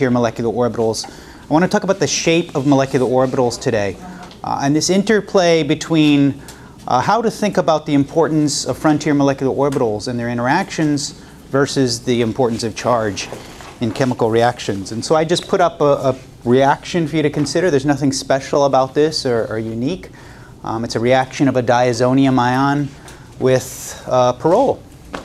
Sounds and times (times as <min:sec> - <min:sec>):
Speech: 0:00.0 - 0:24.9.